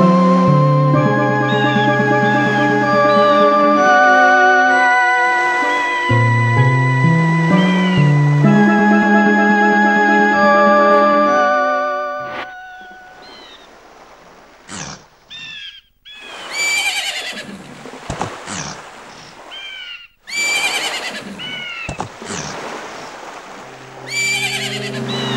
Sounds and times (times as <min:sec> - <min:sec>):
Music: 0:00.0 - 0:13.1, 0:23.7 - 0:25.3
Outside, rural or natural: 0:00.0 - 0:25.3.